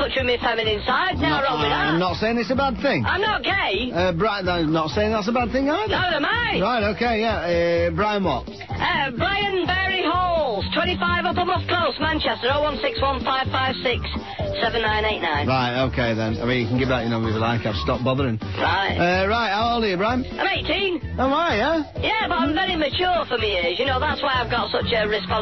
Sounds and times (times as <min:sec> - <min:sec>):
Music: 0:00.0 - 0:25.4.